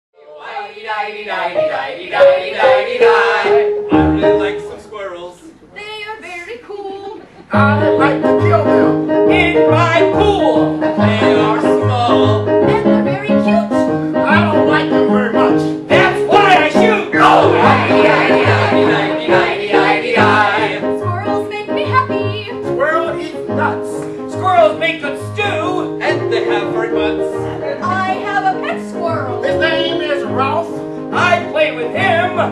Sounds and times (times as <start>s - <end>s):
Music: 0.2s - 4.8s, 7.5s - 32.5s.